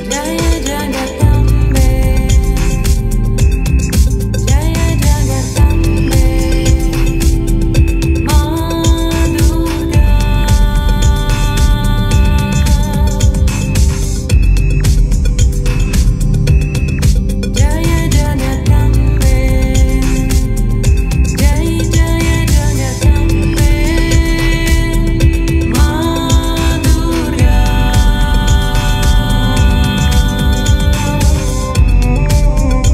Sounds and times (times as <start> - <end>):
Music: 0.0 - 32.9.